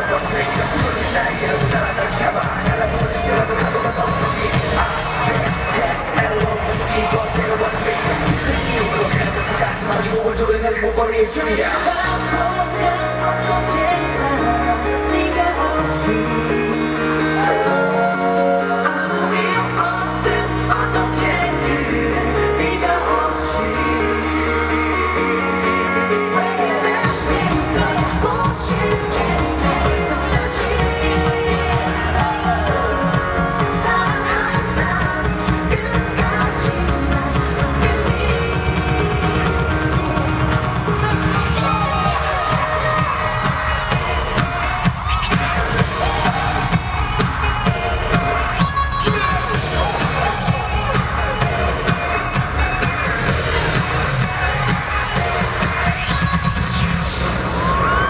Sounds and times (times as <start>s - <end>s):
Music: 0.0s - 58.1s
Singing: 0.0s - 58.1s.